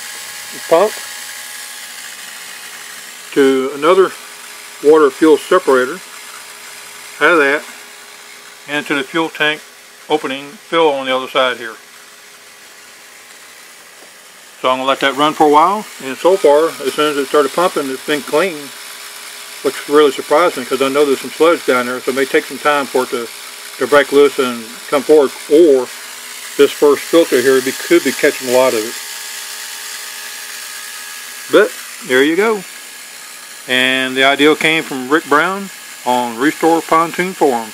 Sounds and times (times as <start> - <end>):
Speech: 0.6 - 1.0, 3.3 - 4.2, 4.8 - 6.0, 7.2 - 7.7, 8.7 - 11.8, 14.6 - 18.8, 19.6 - 25.9, 26.6 - 29.0, 31.5 - 32.7, 33.7 - 37.7.